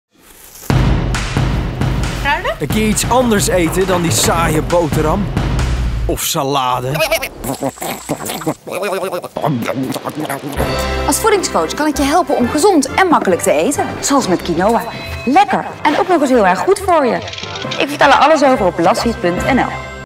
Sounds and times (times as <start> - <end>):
Music: 0.7 - 6.2, 10.3 - 20.0.